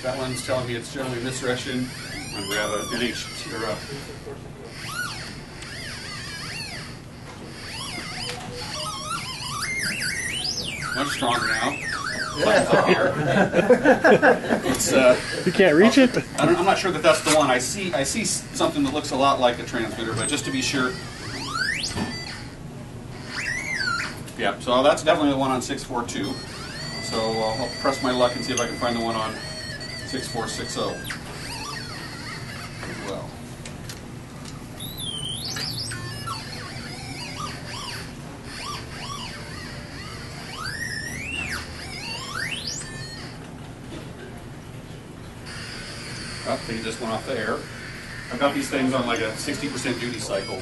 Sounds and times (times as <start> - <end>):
Inside, public space: 0.0 - 50.6.